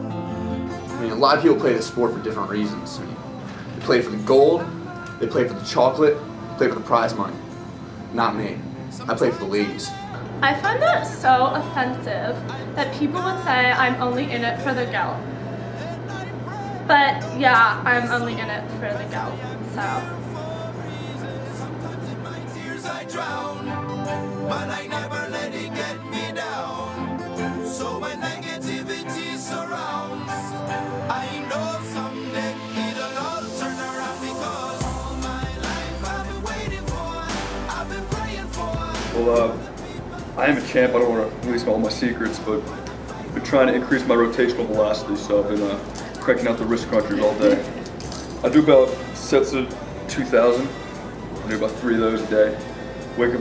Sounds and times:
Music: 0.0s - 53.4s.

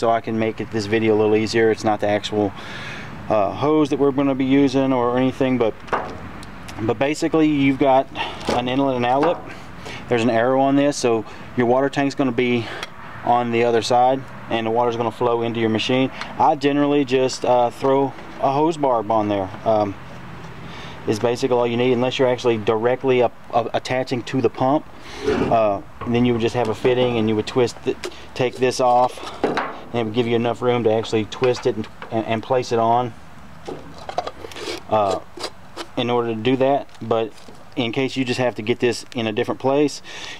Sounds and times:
Speech: 0.0s - 2.5s, 3.3s - 5.8s, 6.8s - 9.4s, 10.1s - 12.7s, 13.3s - 20.0s, 21.1s - 24.8s, 25.5s - 29.2s, 29.9s - 33.2s, 34.9s - 35.2s, 36.0s - 40.0s.

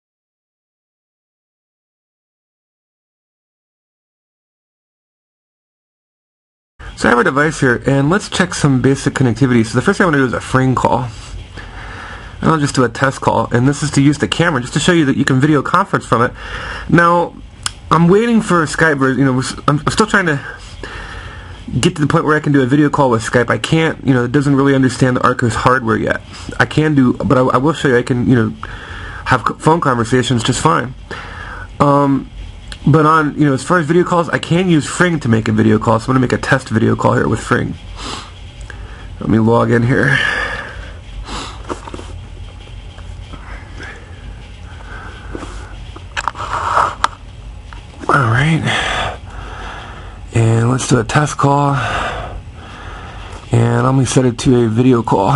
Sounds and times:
Speech: 7.0s - 11.3s, 12.4s - 20.6s, 21.7s - 28.6s, 29.3s - 31.0s, 31.8s - 37.8s, 39.2s - 40.4s, 48.0s - 49.0s, 50.3s - 52.0s, 53.5s - 55.3s.

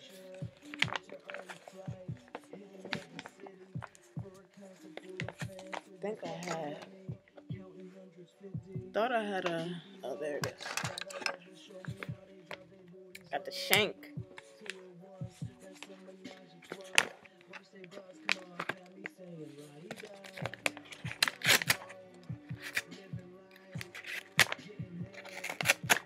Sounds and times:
Music: 0.0s - 26.0s
Speech: 6.0s - 7.0s, 8.8s - 10.8s, 13.2s - 14.1s.

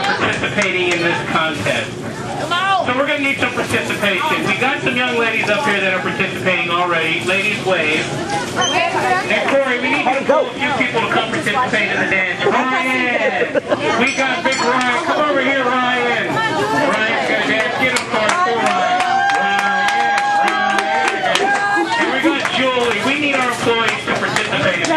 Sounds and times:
Chatter: 0.0s - 24.9s.

